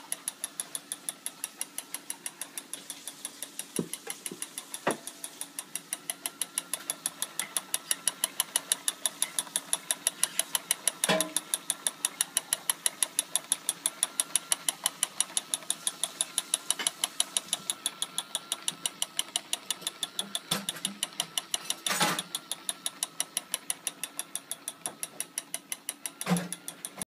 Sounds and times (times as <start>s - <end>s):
Gears: 0.0s - 27.0s
Ratchet, pawl: 0.0s - 27.0s.